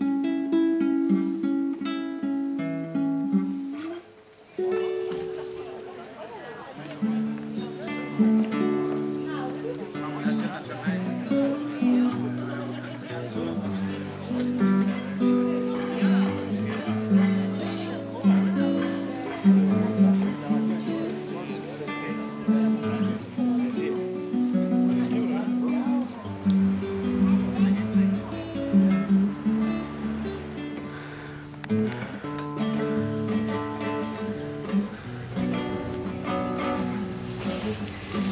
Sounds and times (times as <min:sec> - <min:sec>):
Music: 0:00.0 - 0:38.3
Speech: 0:05.1 - 0:29.7, 0:36.6 - 0:38.3.